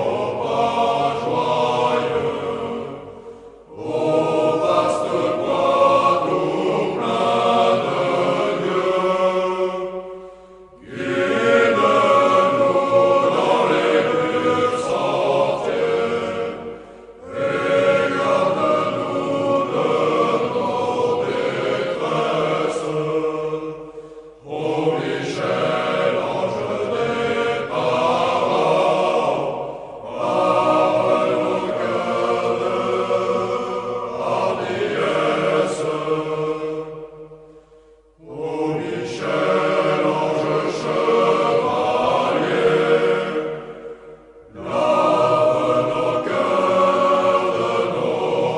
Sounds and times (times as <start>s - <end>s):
Mantra: 0.0s - 10.2s, 10.8s - 37.0s, 38.2s - 43.8s, 44.5s - 48.5s.